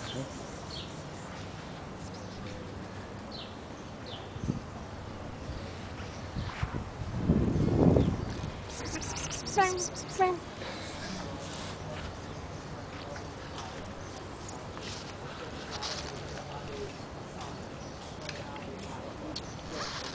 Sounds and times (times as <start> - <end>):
Outside, urban or manmade: 0.0 - 20.1
Speech: 8.8 - 10.4, 15.1 - 20.1.